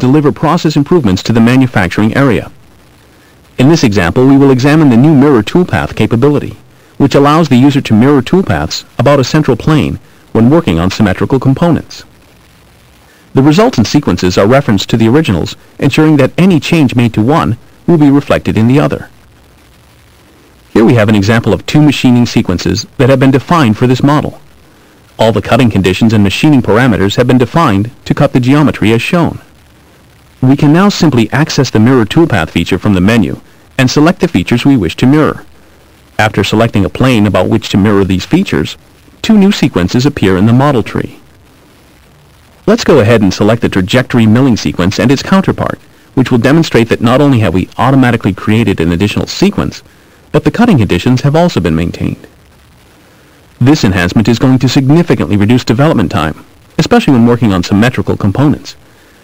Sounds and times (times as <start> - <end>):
Speech: 0.0 - 2.6, 3.6 - 12.1, 13.3 - 19.1, 20.7 - 24.4, 25.2 - 29.5, 30.4 - 35.5, 36.2 - 41.2, 42.6 - 52.4, 53.6 - 58.8.